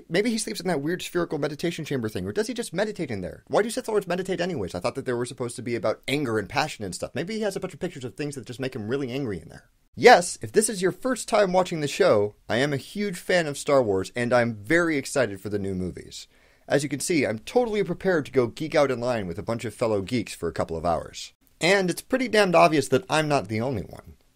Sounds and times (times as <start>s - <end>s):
Speech: 0.0s - 24.2s.